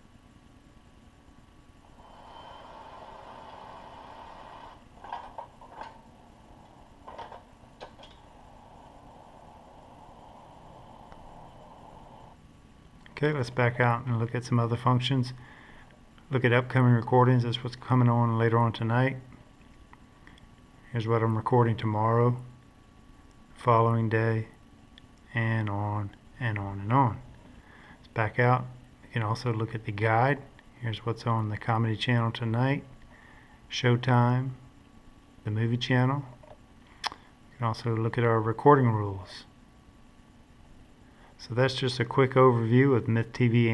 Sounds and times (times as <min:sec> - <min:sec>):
Inside, small room: 0:00.0 - 0:43.7
Speech: 0:13.1 - 0:15.4, 0:16.3 - 0:19.3, 0:20.9 - 0:22.5, 0:23.6 - 0:24.6, 0:25.3 - 0:27.3, 0:28.2 - 0:32.9, 0:33.7 - 0:34.7, 0:35.4 - 0:36.4, 0:37.6 - 0:39.6, 0:41.4 - 0:43.7.